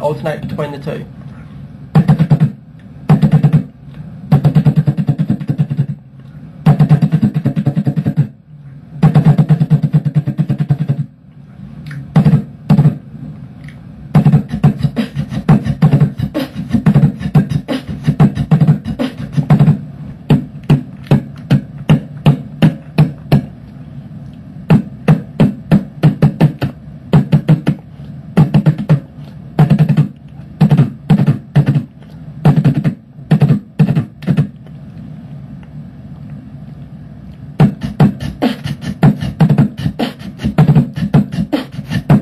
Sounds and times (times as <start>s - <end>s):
Beatboxing: 0.0s - 11.2s, 11.8s - 23.8s, 24.6s - 34.8s, 37.6s - 42.2s.